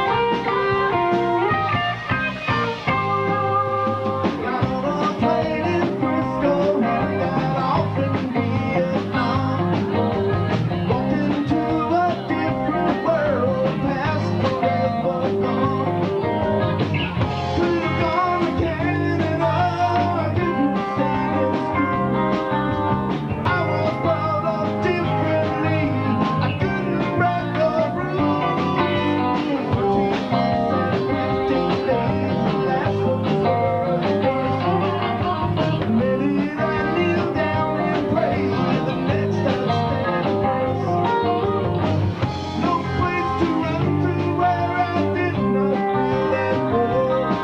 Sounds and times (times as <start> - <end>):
Musical instrument: 0.0 - 47.4.